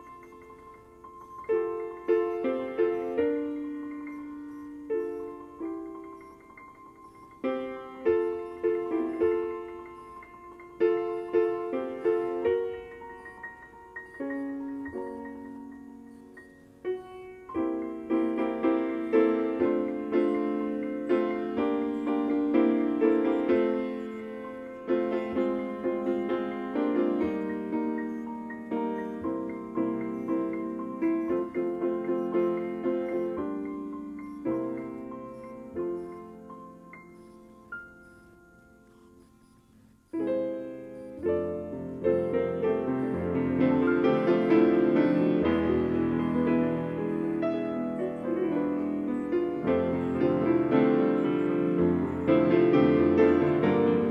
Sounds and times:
Tender music: 0.0s - 54.1s.

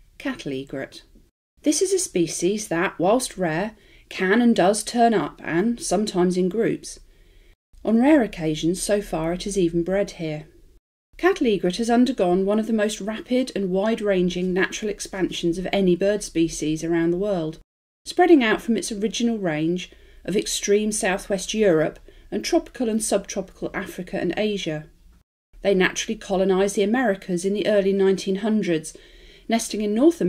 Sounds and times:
Speech: 0.2s - 7.0s, 7.8s - 10.5s, 11.2s - 24.9s, 25.6s - 30.2s.

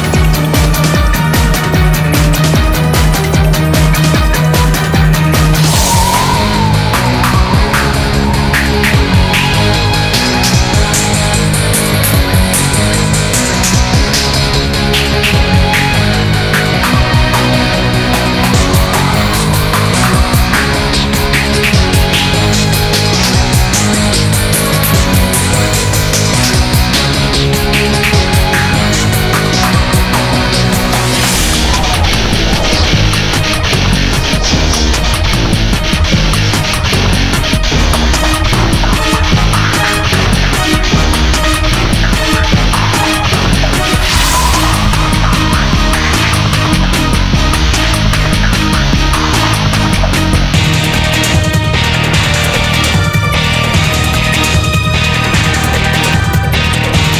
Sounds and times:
Music: 0.0s - 57.2s.

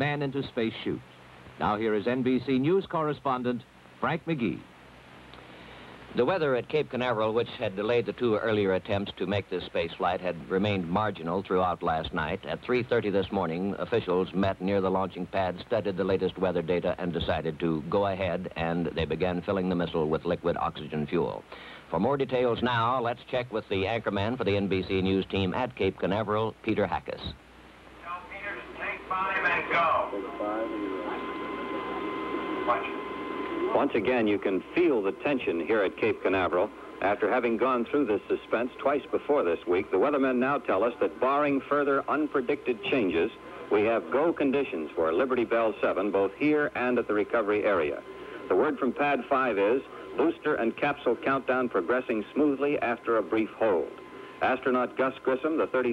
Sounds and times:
Speech: 0.0s - 4.7s, 6.2s - 27.4s, 28.0s - 31.3s, 33.7s - 55.9s.

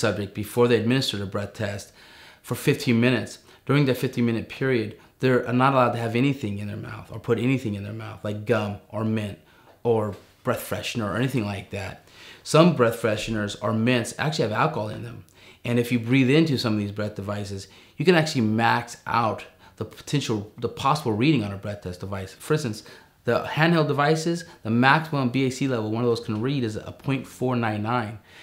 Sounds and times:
Speech: 0.0s - 28.2s.

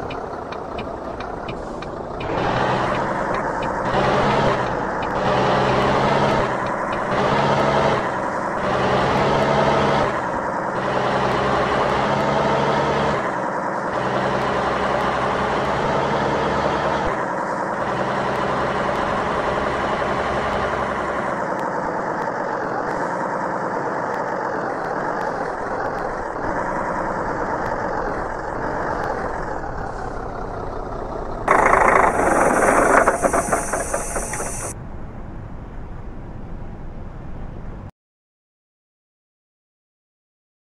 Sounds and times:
Medium engine (mid frequency): 0.0s - 34.8s
Whir: 0.0s - 34.8s.

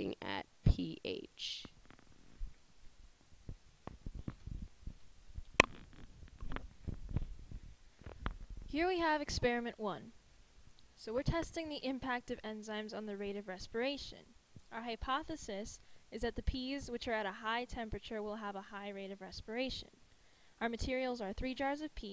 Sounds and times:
Speech: 0.0s - 1.8s, 8.7s - 10.2s, 11.0s - 20.0s, 20.6s - 22.1s.

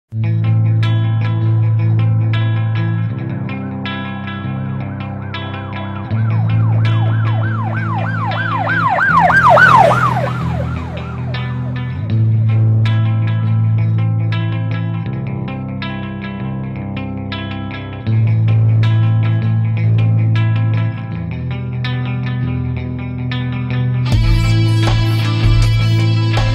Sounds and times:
Ambulance (siren): 6.0s - 12.0s.

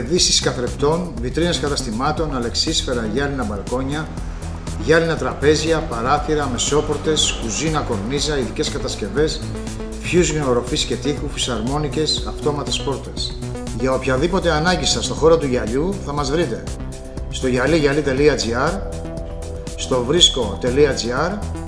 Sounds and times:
Speech: 0.0s - 4.1s, 4.8s - 9.4s, 10.0s - 16.7s, 17.3s - 18.8s, 19.8s - 21.4s
Music: 0.0s - 21.6s.

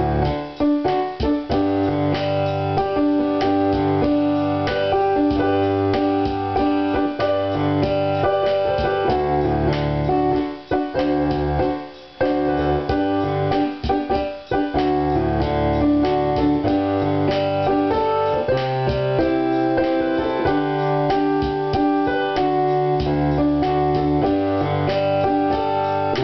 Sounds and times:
Music: 0.0s - 26.2s.

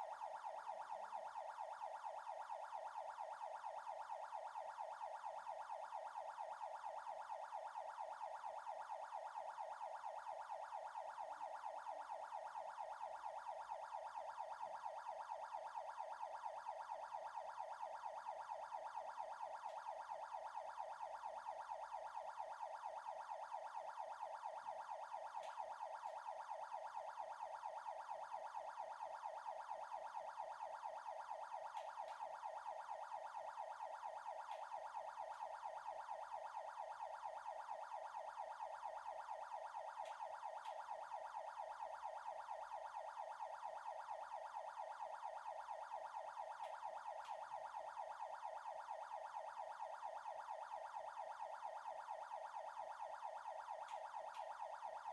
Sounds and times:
Police car (siren): 0.0s - 55.1s.

